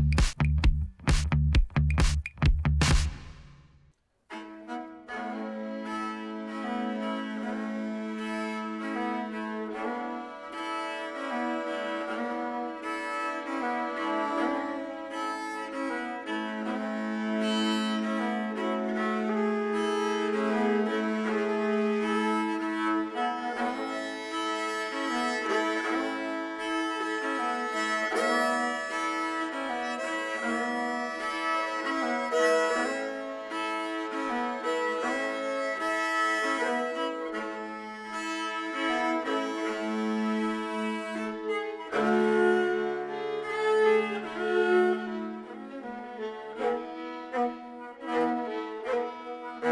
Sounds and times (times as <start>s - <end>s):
Violin, fiddle: 4.3s - 49.7s.